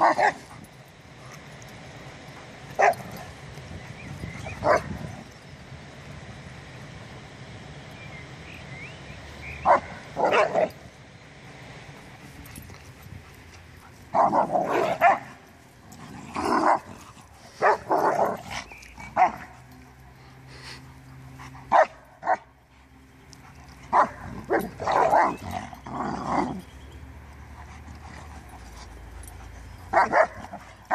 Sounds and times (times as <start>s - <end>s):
Canidae, dogs, wolves: 2.7s - 3.4s, 12.5s - 20.0s, 21.2s - 22.5s, 23.3s - 30.9s.